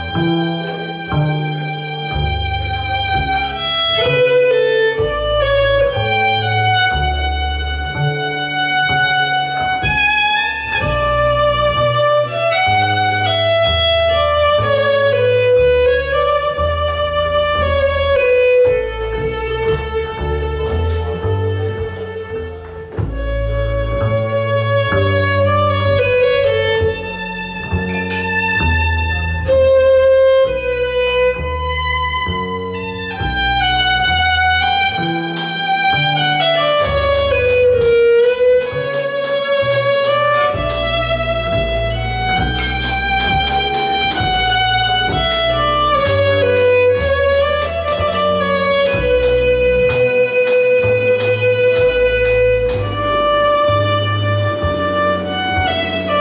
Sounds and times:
Violin, fiddle: 0:00.0 - 0:56.2.

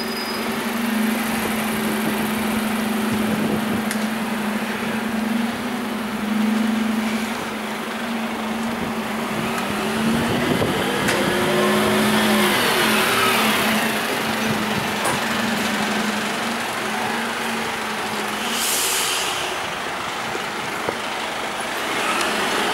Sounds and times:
Heavy engine (low frequency): 0:00.0 - 0:22.7
Truck: 0:00.0 - 0:22.7.

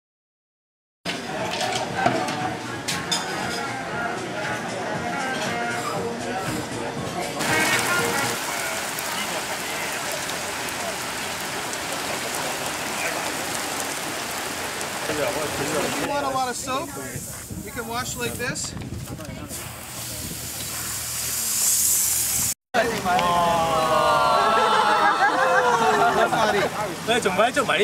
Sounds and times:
Speech: 0:15.0 - 0:19.6, 0:22.8 - 0:27.8.

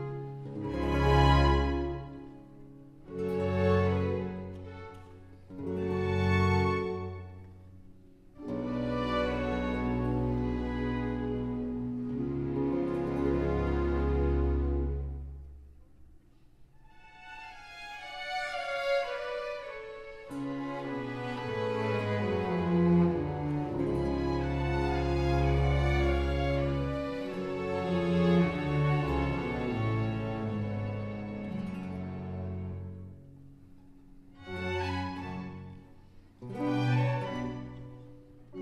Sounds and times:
Violin, fiddle: 0:00.0 - 0:15.2, 0:16.8 - 0:33.4, 0:34.2 - 0:38.6.

